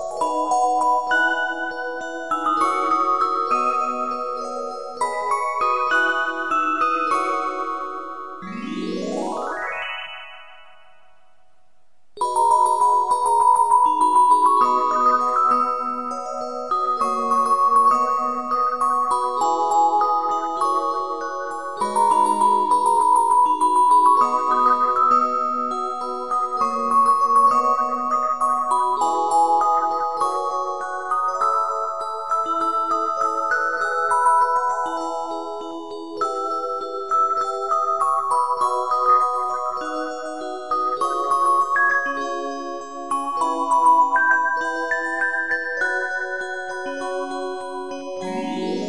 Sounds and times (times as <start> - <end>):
Music: 0.0 - 48.8.